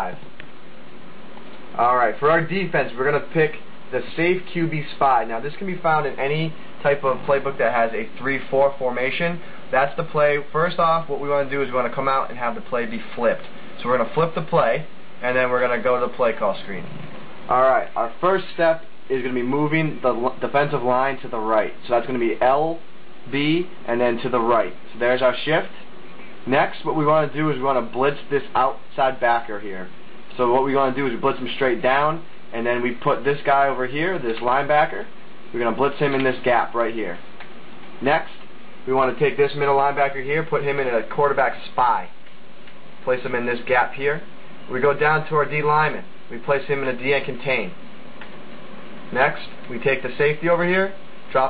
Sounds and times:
Speech: 0.0s - 0.3s, 1.8s - 37.3s, 38.0s - 42.2s, 43.0s - 47.8s, 49.1s - 51.5s.

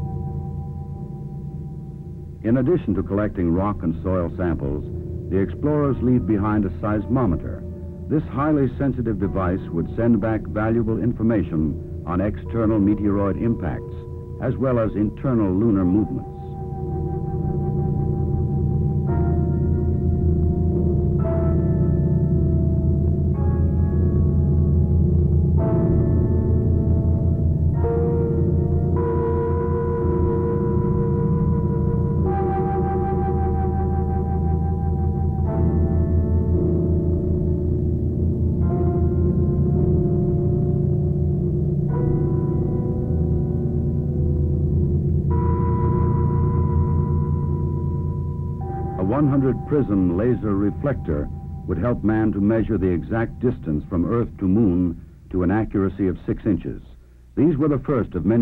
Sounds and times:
Gong: 11.7s - 54.2s.

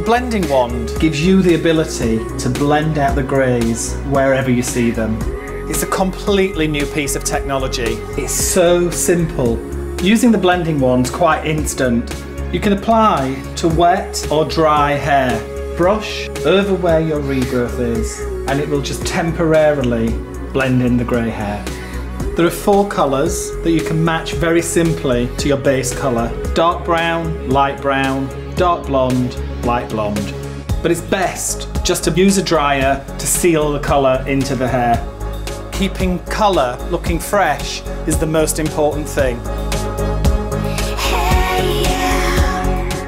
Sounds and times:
Speech: 0.0s - 35.1s, 35.7s - 39.4s
Music: 0.0s - 43.0s.

